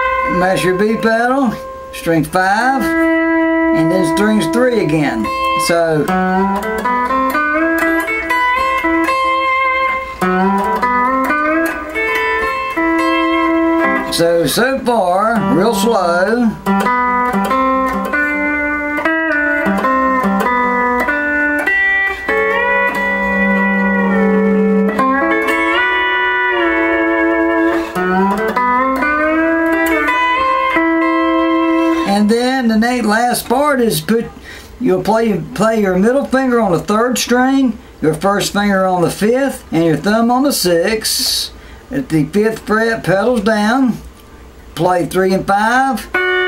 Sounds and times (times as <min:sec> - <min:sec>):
Music: 0:00.0 - 0:40.1, 0:44.1 - 0:46.4
Speech: 0:00.3 - 0:03.0, 0:03.8 - 0:06.2, 0:14.1 - 0:16.6, 0:32.1 - 0:44.1, 0:44.8 - 0:46.1.